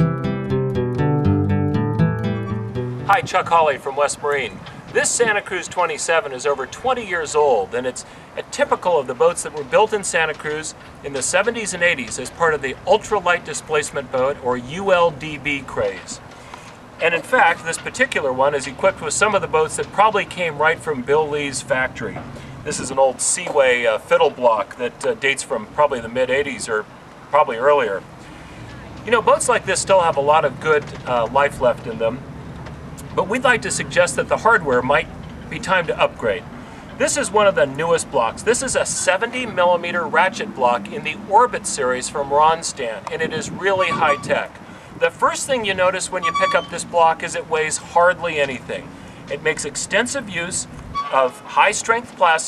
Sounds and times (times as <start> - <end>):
Speech: 3.1 - 16.2, 17.0 - 28.0, 29.0 - 32.2, 33.0 - 52.4.